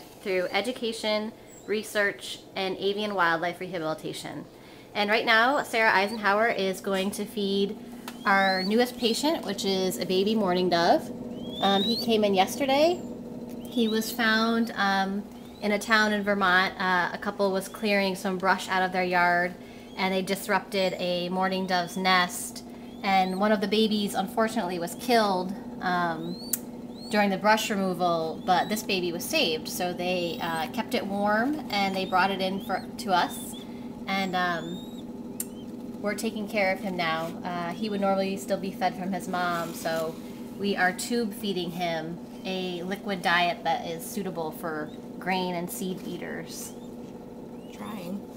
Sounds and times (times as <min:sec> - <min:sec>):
Speech: 0:00.0 - 0:13.0, 0:13.7 - 0:26.4, 0:27.1 - 0:34.8, 0:36.0 - 0:46.8, 0:47.7 - 0:48.2.